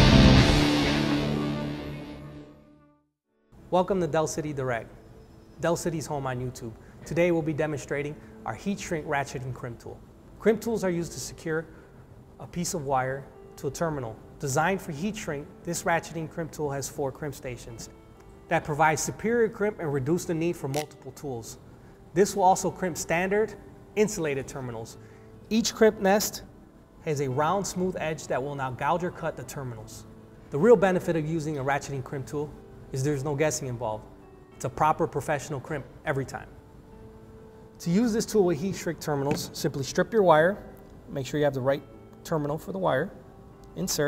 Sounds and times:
Music: 0.0 - 44.0
Speech: 3.7 - 4.9, 5.6 - 11.7, 12.4 - 17.9, 18.5 - 21.6, 22.2 - 36.5, 37.8 - 43.2, 43.8 - 44.0.

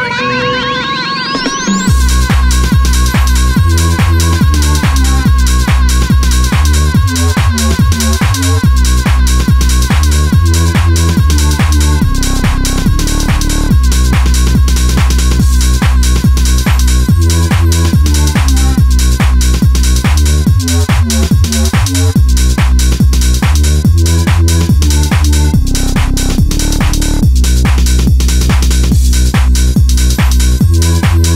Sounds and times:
Music: 0.0 - 31.3.

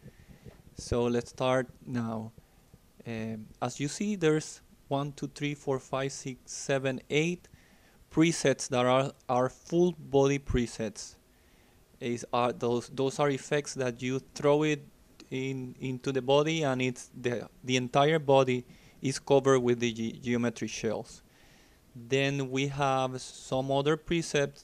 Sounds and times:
Speech: 0.8 - 2.4, 3.0 - 7.5, 8.1 - 11.2, 12.0 - 21.2, 22.0 - 24.6.

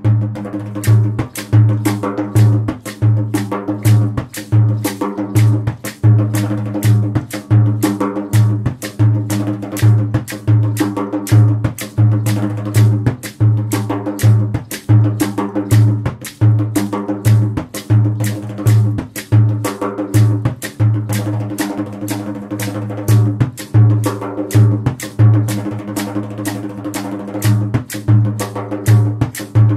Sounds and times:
Drum: 0.0 - 29.7.

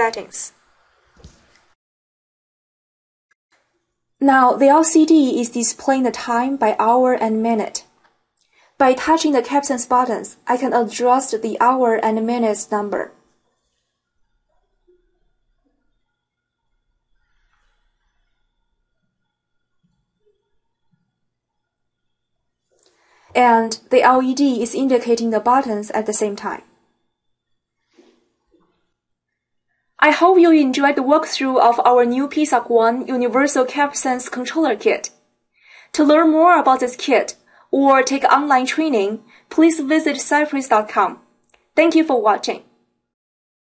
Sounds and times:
Narration, monologue: 0.0 - 1.7, 3.6 - 13.4, 22.7 - 29.1, 29.9 - 43.1.

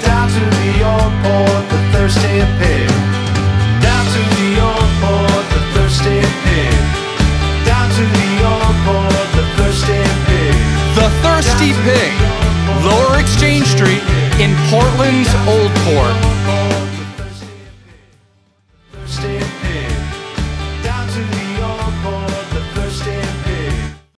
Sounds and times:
Music: 0.0 - 24.1
Speech: 10.9 - 16.3.

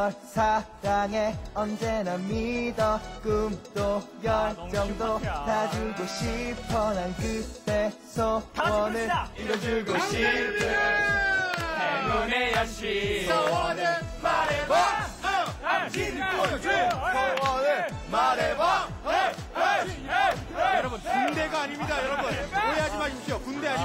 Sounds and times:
Male singing: 0.0 - 14.8
Choir: 2.5 - 23.8
Speech: 20.8 - 23.8.

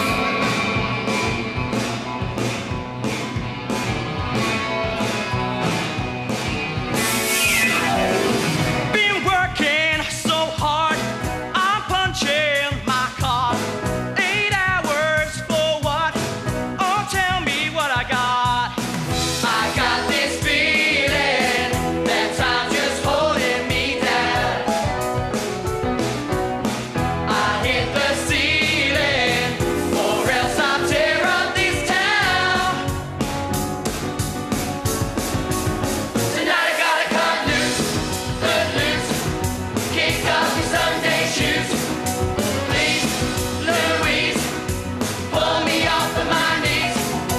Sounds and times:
Music: 0.0 - 47.3.

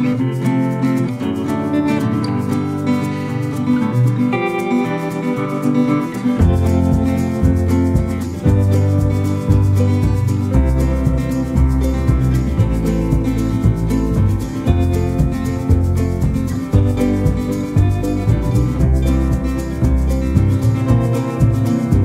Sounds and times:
Music: 0.0 - 22.0.

